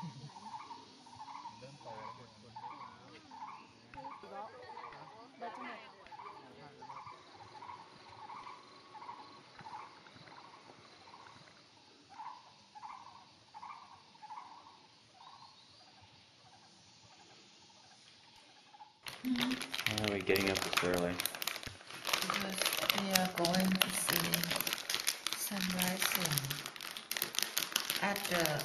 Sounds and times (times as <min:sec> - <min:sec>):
Crumpling, crinkling: 0:19.0 - 0:28.6
Speech: 0:19.3 - 0:21.2, 0:22.2 - 0:24.6, 0:25.4 - 0:26.6, 0:28.0 - 0:28.6.